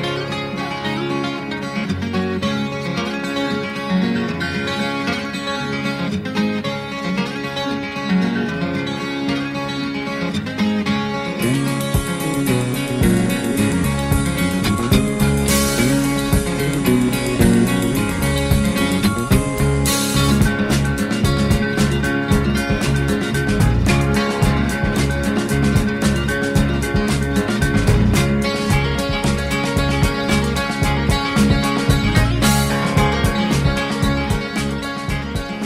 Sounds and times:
Music: 0.0 - 35.6.

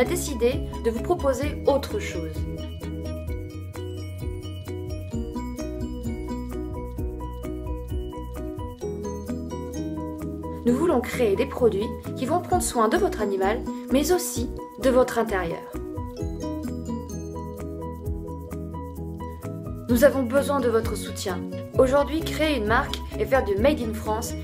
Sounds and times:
Speech: 0.0 - 2.5, 10.6 - 15.8, 19.9 - 24.4
Music: 0.0 - 24.4.

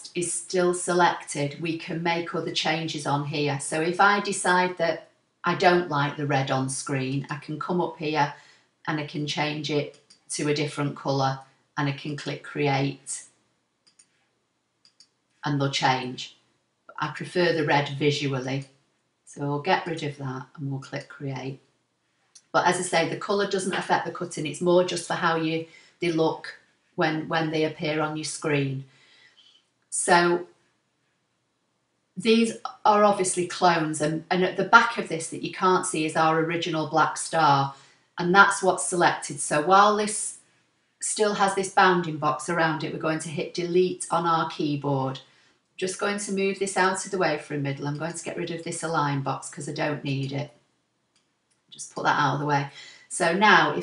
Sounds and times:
Speech: 0.0 - 13.2, 15.4 - 16.3, 16.9 - 18.7, 19.3 - 21.6, 22.4 - 28.9, 30.0 - 30.5, 32.2 - 40.4, 41.0 - 50.5, 51.8 - 53.8.

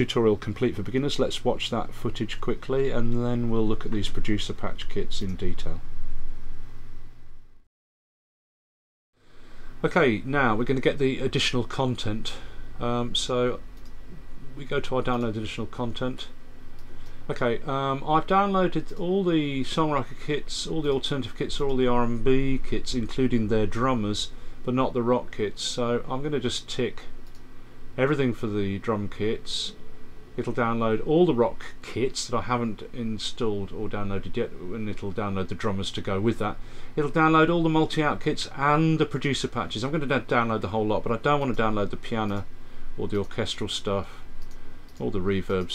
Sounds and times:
Speech: 0.0 - 5.8, 9.8 - 13.6, 14.5 - 16.4, 17.3 - 27.2, 28.0 - 29.8, 30.4 - 44.3, 45.0 - 45.7.

